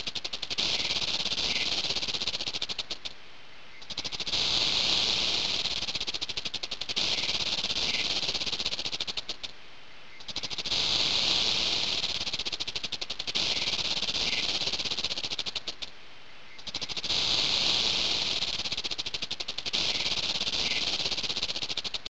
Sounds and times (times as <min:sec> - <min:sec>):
Snake: 0:00.0 - 0:22.1.